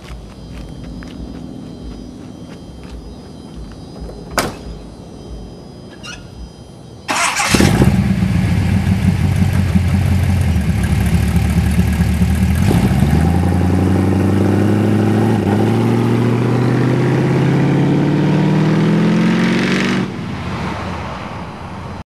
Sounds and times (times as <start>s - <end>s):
Truck: 7.1s - 22.0s.